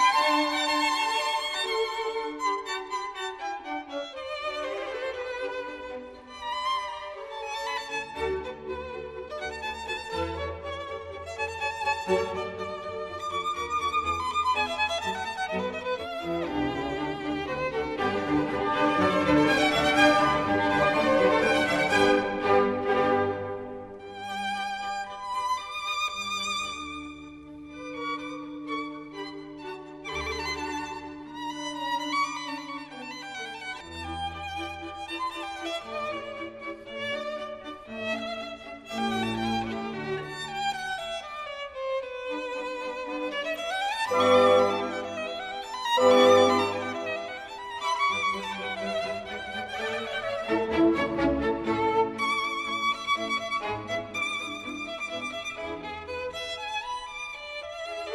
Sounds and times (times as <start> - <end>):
Violin, fiddle: 0.0 - 58.1.